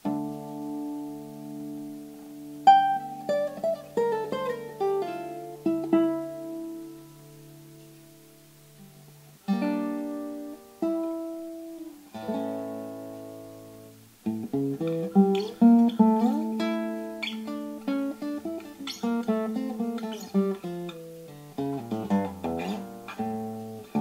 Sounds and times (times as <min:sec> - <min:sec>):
Acoustic guitar: 0:00.0 - 0:24.0.